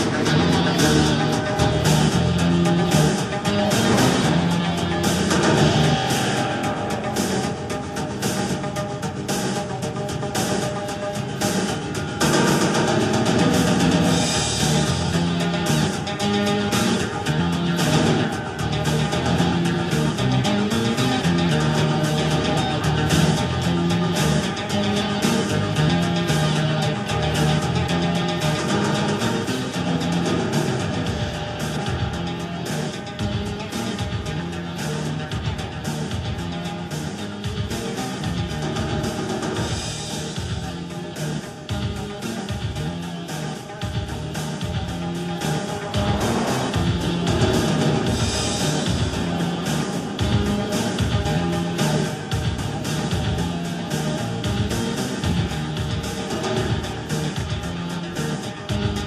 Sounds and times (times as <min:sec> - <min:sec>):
Music: 0:00.0 - 0:59.0.